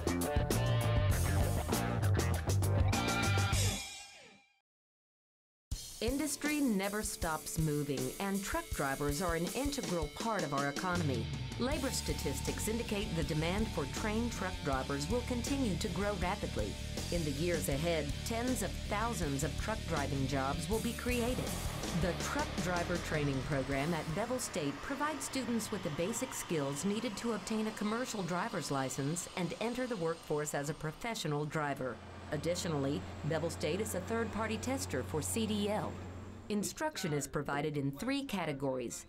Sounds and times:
Speech: 0:06.0 - 0:39.0.

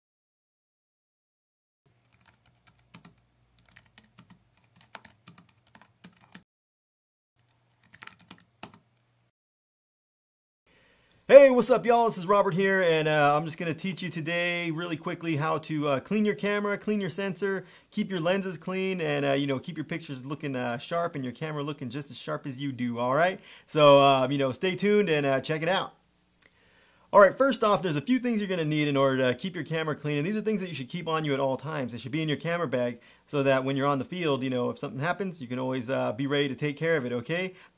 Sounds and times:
Computer keyboard: 0:02.0 - 0:06.4, 0:07.4 - 0:09.0.

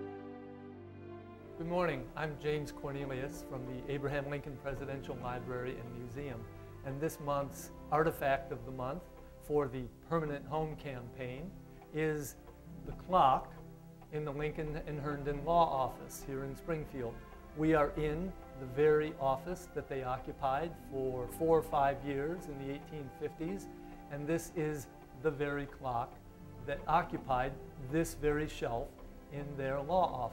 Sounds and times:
Music: 0:00.0 - 0:30.3
Speech: 0:01.6 - 0:30.3.

